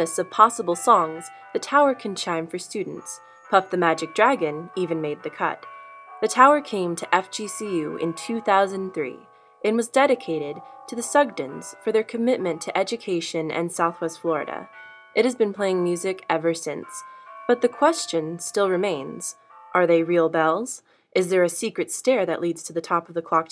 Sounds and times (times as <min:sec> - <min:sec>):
Speech: 0:00.0 - 0:05.6, 0:06.2 - 0:23.5.